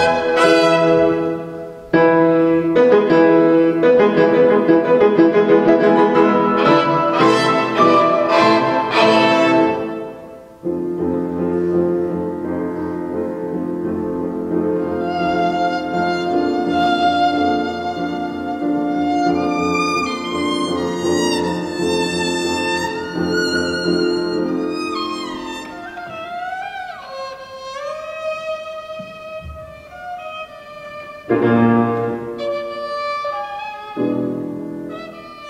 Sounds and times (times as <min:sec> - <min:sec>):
Violin, fiddle: 0:00.0 - 0:01.7, 0:05.7 - 0:10.3, 0:14.8 - 0:35.4.